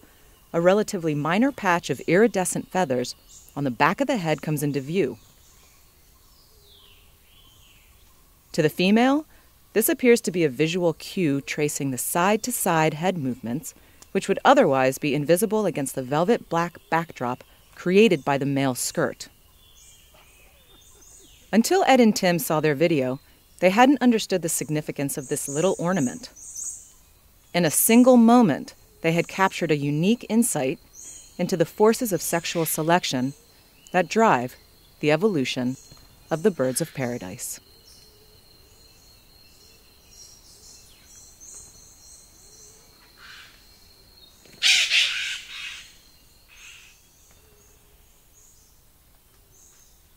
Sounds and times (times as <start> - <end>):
Speech: 0.6 - 5.2, 8.6 - 19.3, 21.6 - 26.3, 27.6 - 30.8, 31.4 - 33.4, 34.0 - 37.6
Bird: 16.1 - 50.1.